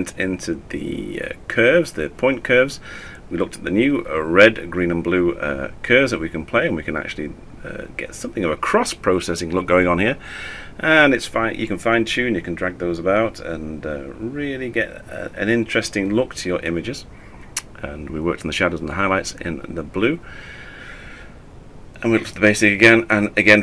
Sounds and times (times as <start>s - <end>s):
Speech: 0.0s - 10.2s, 10.8s - 20.2s, 22.0s - 23.6s.